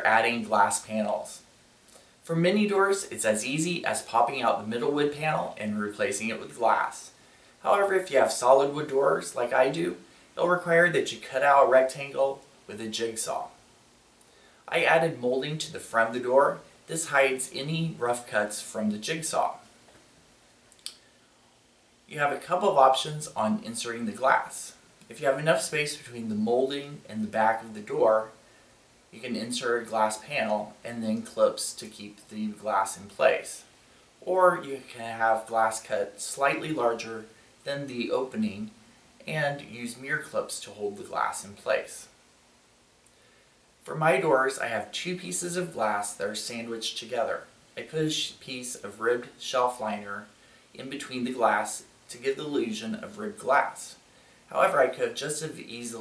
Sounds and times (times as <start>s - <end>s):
Speech: 0.0s - 1.5s, 2.2s - 13.6s, 14.7s - 19.7s, 22.1s - 28.4s, 29.1s - 42.2s, 43.8s - 56.0s.